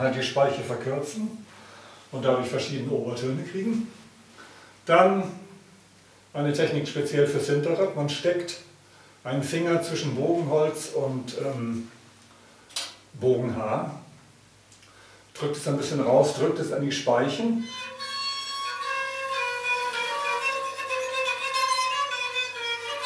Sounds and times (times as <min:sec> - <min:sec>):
Speech: 0:00.0 - 0:01.5, 0:02.1 - 0:04.0, 0:04.9 - 0:05.5, 0:06.4 - 0:11.9, 0:13.1 - 0:14.1, 0:15.4 - 0:17.7.